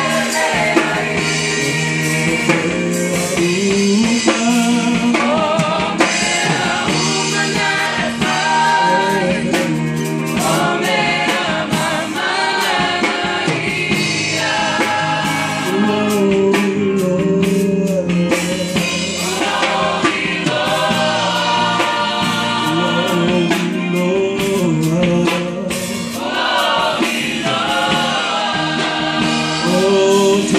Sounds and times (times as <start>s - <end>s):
Choir: 0.0s - 17.5s, 18.1s - 30.5s.